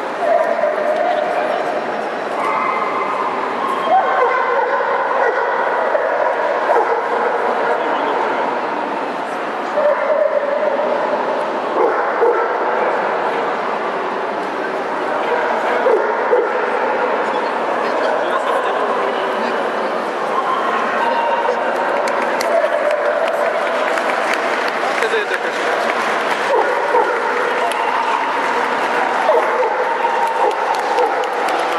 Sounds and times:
Bow-wow: 0:03.9 - 0:07.8, 0:11.8 - 0:12.6, 0:26.5 - 0:27.4, 0:29.3 - 0:31.4
Speech: 0:12.4 - 0:24.1, 0:24.8 - 0:26.1.

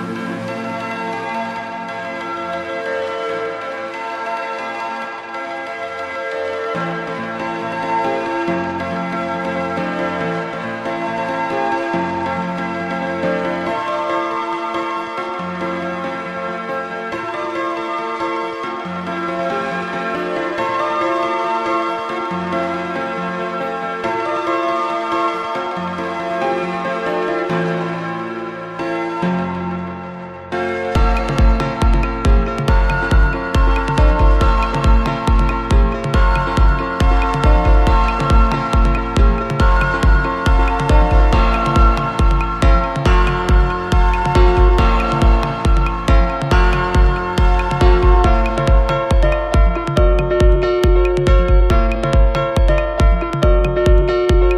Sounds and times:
Electronica: 0:00.0 - 0:54.5.

